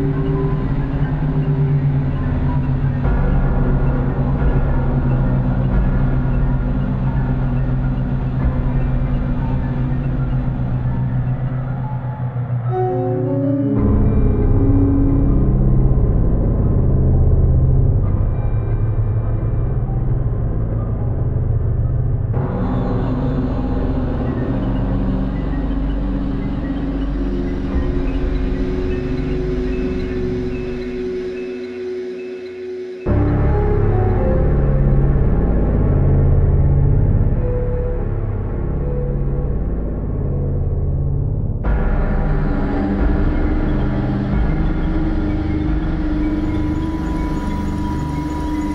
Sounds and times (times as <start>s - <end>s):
Music: 0.0s - 48.7s.